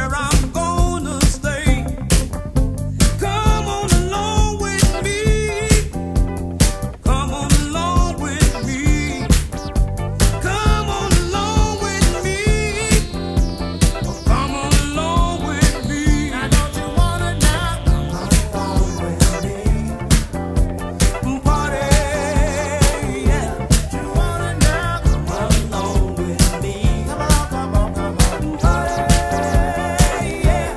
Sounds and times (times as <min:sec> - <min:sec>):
Soul music: 0:00.0 - 0:30.7.